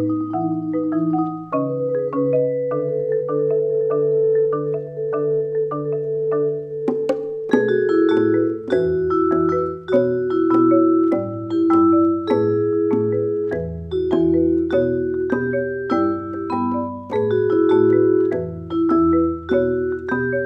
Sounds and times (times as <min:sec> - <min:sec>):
Percussion: 0:00.0 - 0:20.4.